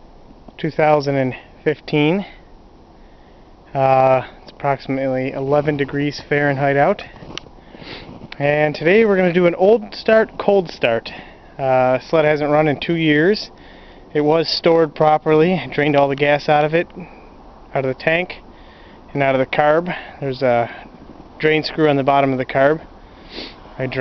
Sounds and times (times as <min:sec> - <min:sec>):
Speech: 0:00.6 - 0:02.4, 0:03.7 - 0:07.1, 0:08.4 - 0:13.5, 0:14.2 - 0:17.1, 0:17.8 - 0:18.4, 0:19.1 - 0:20.8, 0:21.4 - 0:22.9, 0:23.8 - 0:24.0.